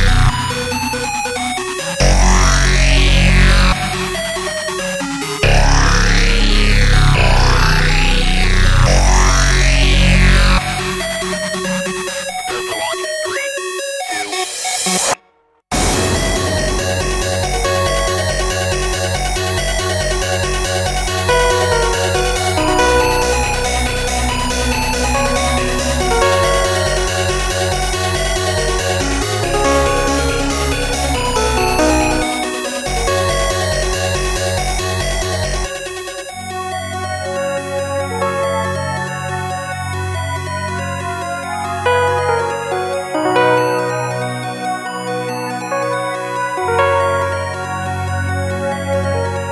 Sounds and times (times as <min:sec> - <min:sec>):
Video game music: 0:00.0 - 0:15.1, 0:15.8 - 0:49.5.